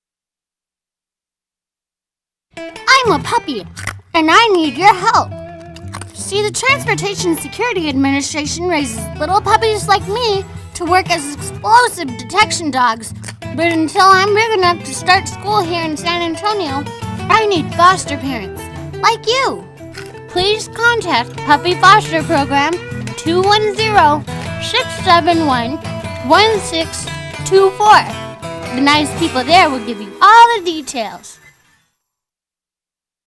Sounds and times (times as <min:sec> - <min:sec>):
Music: 0:02.6 - 0:32.2
Speech: 0:02.9 - 0:05.3, 0:06.2 - 0:19.7, 0:20.4 - 0:31.4.